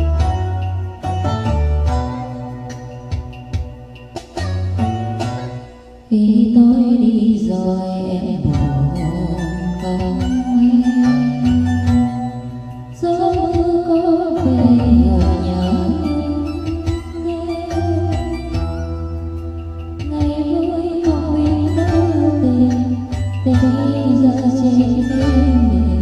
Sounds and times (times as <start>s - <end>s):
Music: 0.0s - 26.0s
Female singing: 6.1s - 12.4s, 13.0s - 18.3s, 20.1s - 26.0s.